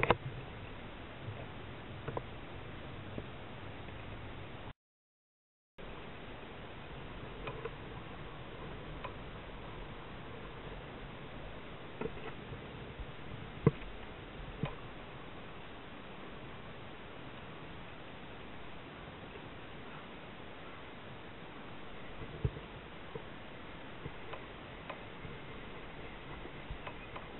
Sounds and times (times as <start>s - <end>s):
Rowboat, canoe, kayak: 0.0s - 4.7s, 5.8s - 27.3s.